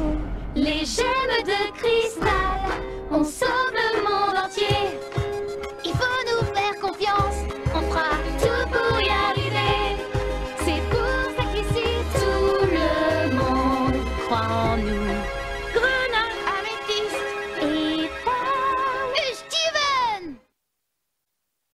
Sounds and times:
Music: 0:00.0 - 0:20.5
Speech: 0:19.1 - 0:20.4.

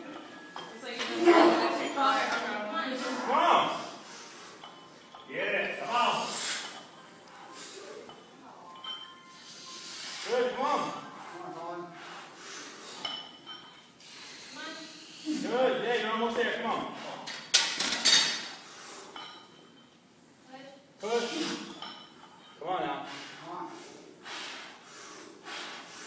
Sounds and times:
Male speech, man speaking: 0:05.3 - 0:06.4, 0:10.3 - 0:11.9, 0:15.3 - 0:17.2, 0:22.6 - 0:23.8.

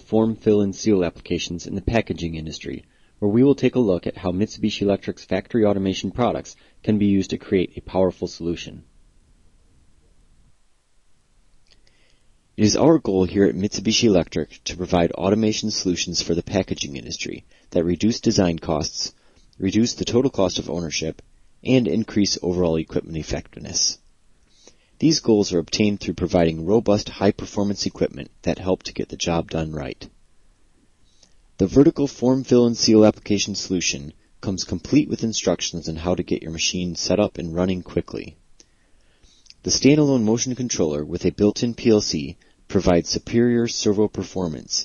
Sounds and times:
Speech: 0:00.0 - 0:08.9, 0:12.6 - 0:24.0, 0:25.0 - 0:30.2, 0:31.6 - 0:38.4, 0:39.5 - 0:44.8.

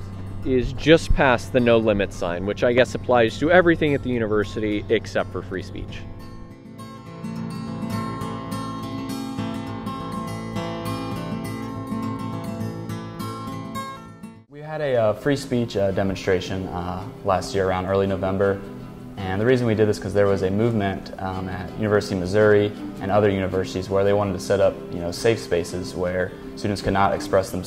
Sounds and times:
Narration, monologue: 0:00.0 - 0:06.9, 0:14.4 - 0:27.6
Music: 0:00.0 - 0:27.6
Male speech, man speaking: 0:00.5 - 0:06.1, 0:14.5 - 0:18.6, 0:19.2 - 0:27.6.

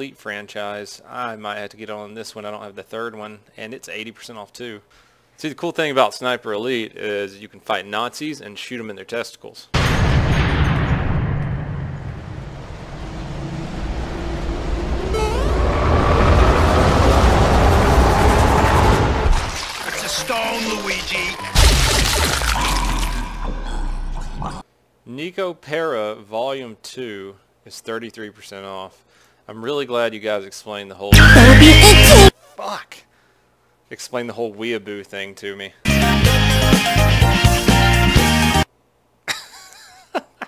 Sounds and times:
Speech: 0:00.0 - 0:09.8, 0:20.0 - 0:21.5, 0:25.1 - 0:33.1, 0:33.9 - 0:35.8.

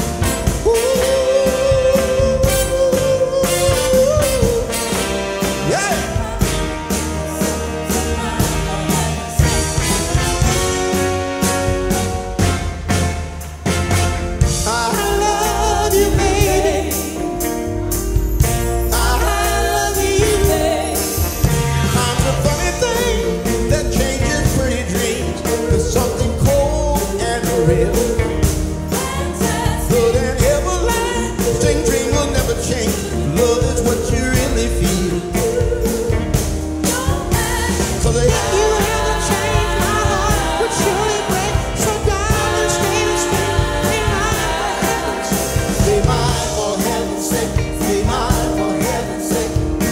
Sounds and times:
Gospel music: 0:00.0 - 0:49.9
Soul music: 0:00.0 - 0:49.9.

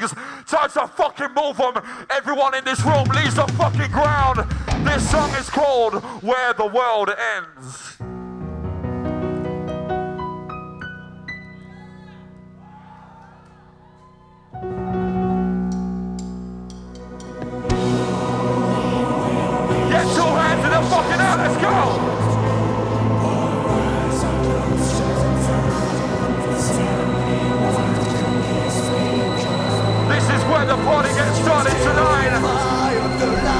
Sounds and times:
Singing: 0:17.6 - 0:33.5.

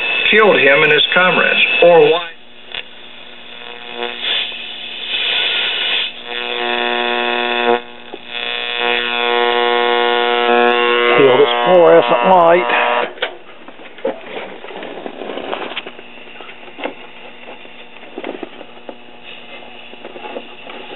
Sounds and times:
Radio: 0:00.0 - 0:13.2, 0:15.8 - 0:20.9
Speech: 0:00.3 - 0:02.4, 0:11.2 - 0:12.7.

